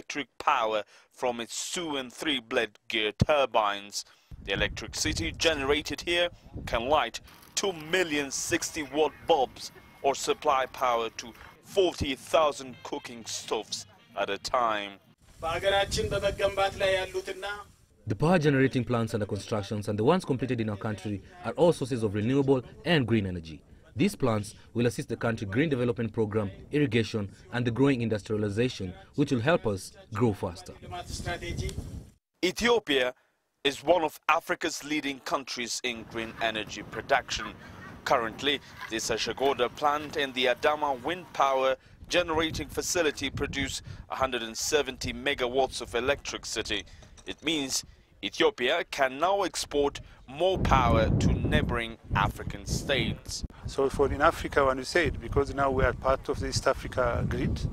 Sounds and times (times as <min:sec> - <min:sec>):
Speech: 0:00.0 - 0:31.7, 0:32.4 - 0:57.7.